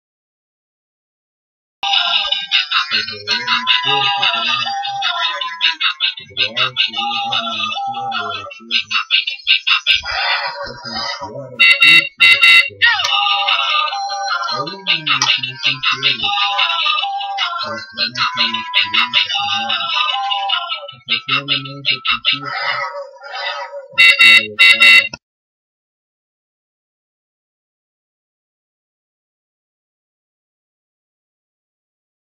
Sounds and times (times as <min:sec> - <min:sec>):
Speech: 0:01.8 - 0:25.2.